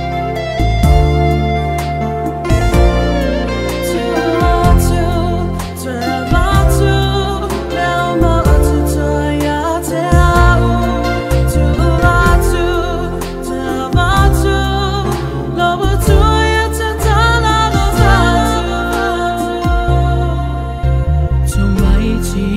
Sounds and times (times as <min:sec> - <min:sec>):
Gospel music: 0:00.0 - 0:22.5.